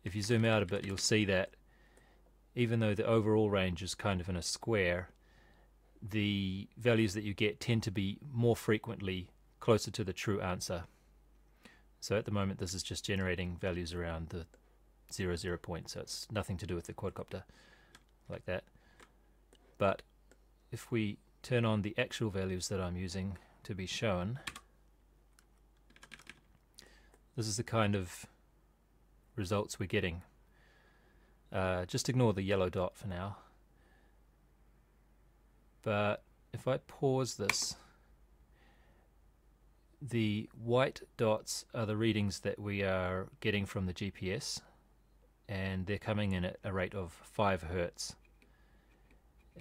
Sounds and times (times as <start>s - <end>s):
Speech: 0.0s - 1.6s, 2.6s - 5.2s, 6.0s - 10.9s, 12.0s - 17.5s, 18.3s - 18.7s, 19.8s - 20.1s, 20.7s - 24.5s, 27.4s - 28.4s, 29.4s - 30.3s, 31.5s - 33.6s, 35.8s - 38.0s, 40.0s - 44.8s, 45.5s - 48.2s
Computer keyboard: 24.5s - 24.7s, 25.4s - 26.6s.